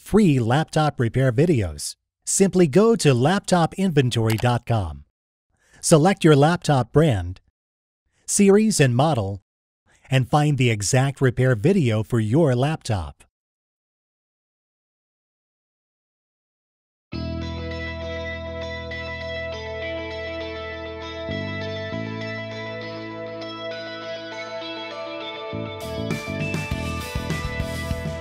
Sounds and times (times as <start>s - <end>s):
Music: 17.1s - 28.2s.